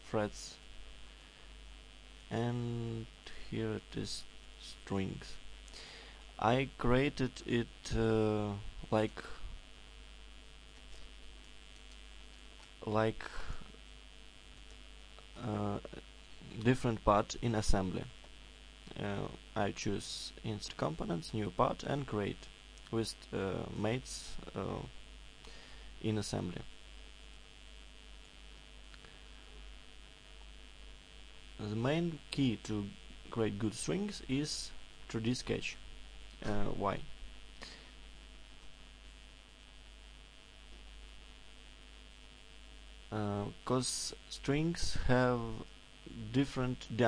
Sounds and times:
Speech: 0.0s - 0.6s, 2.3s - 5.4s, 6.4s - 9.5s, 12.8s - 13.7s, 15.3s - 18.2s, 18.9s - 25.0s, 26.0s - 26.7s, 31.6s - 35.8s, 36.4s - 37.1s, 43.1s - 47.0s.

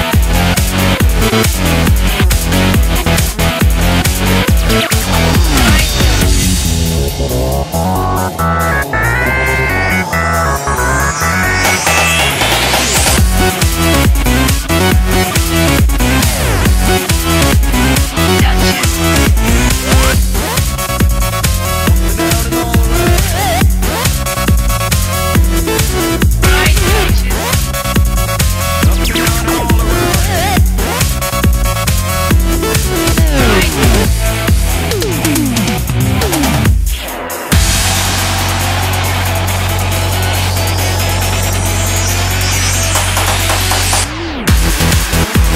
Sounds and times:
Rhythm and blues: 0.0s - 45.5s.

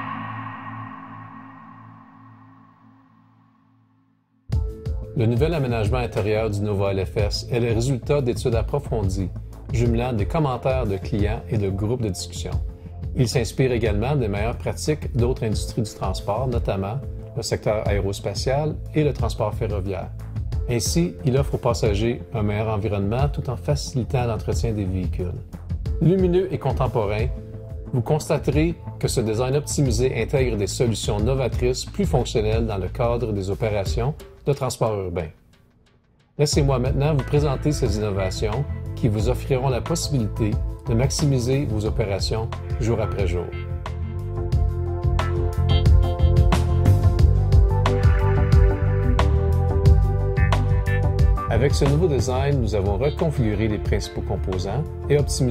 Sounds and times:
Music: 0.0s - 55.5s
Speech: 5.2s - 12.6s, 13.2s - 20.1s, 20.7s - 25.4s, 26.0s - 35.4s, 36.4s - 43.6s, 51.5s - 55.5s.

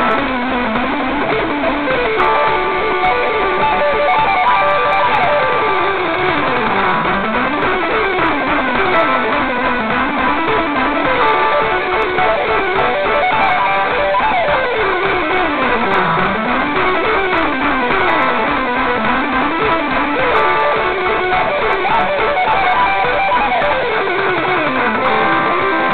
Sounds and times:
Music: 0.0s - 25.9s.

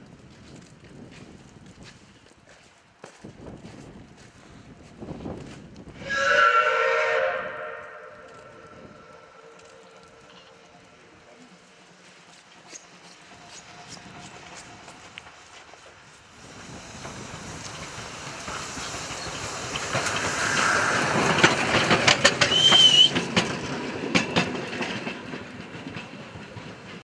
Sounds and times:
Heavy engine (low frequency): 10.4s - 27.0s.

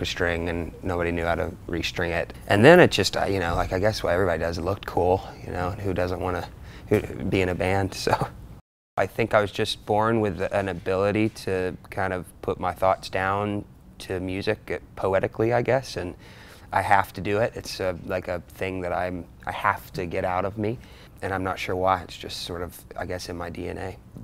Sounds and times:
Speech: 0.0s - 8.4s, 9.0s - 24.0s.

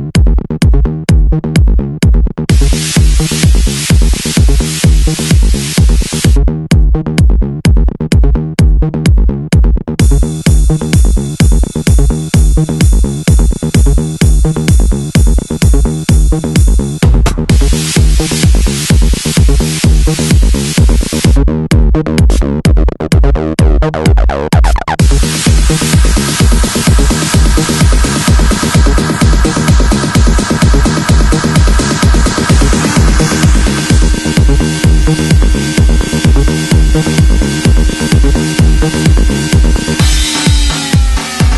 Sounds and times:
Techno: 0.0s - 41.5s.

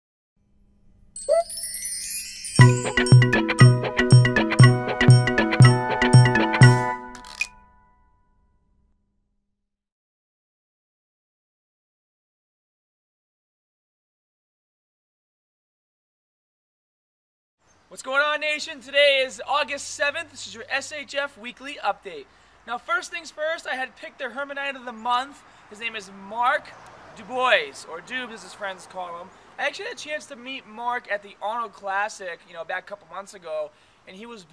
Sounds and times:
Music: 1.2s - 8.7s.

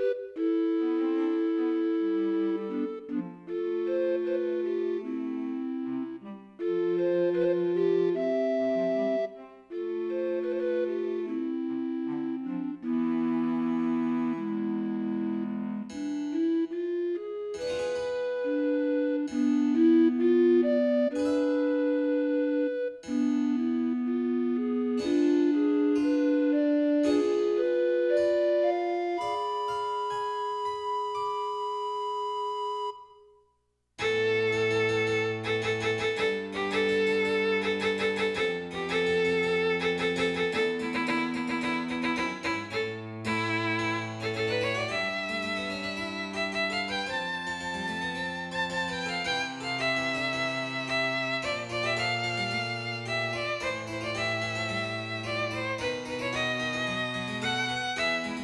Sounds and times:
Music: 0.0s - 58.4s.

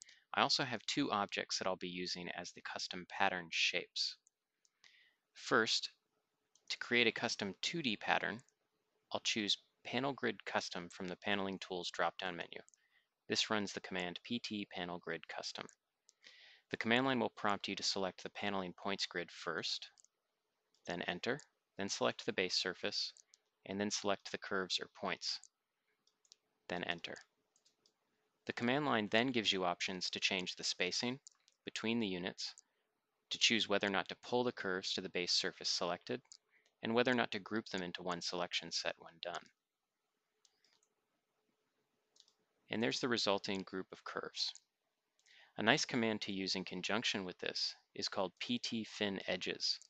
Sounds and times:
Speech: 0.0s - 4.2s, 5.4s - 6.0s, 6.7s - 8.5s, 9.1s - 15.8s, 16.7s - 20.0s, 20.9s - 25.5s, 26.7s - 27.3s, 28.5s - 32.6s, 33.3s - 39.6s, 42.7s - 44.7s, 45.5s - 49.9s.

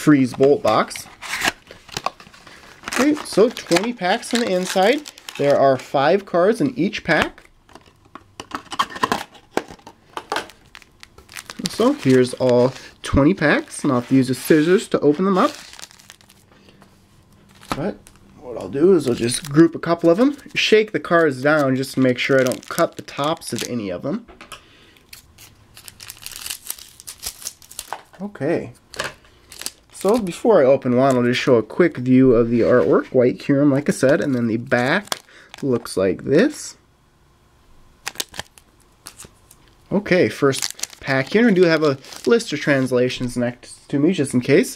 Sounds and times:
Speech: 0.0s - 1.1s, 2.9s - 7.4s, 11.6s - 15.6s, 17.7s - 24.3s, 28.2s - 28.8s, 30.0s - 36.8s, 39.9s - 44.7s
Inside, small room: 0.0s - 44.7s
Crumpling, crinkling: 0.3s - 5.9s, 7.2s - 16.5s, 17.3s - 18.4s, 19.0s - 23.8s, 25.0s - 28.2s, 28.9s - 31.4s, 33.9s - 35.9s, 38.0s - 42.9s.

